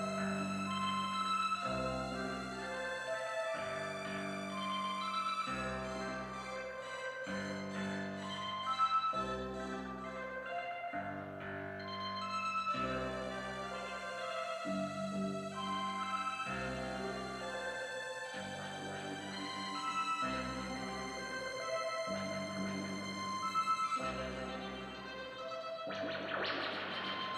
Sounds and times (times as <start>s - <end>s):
Inside, large room or hall: 0.0s - 27.3s.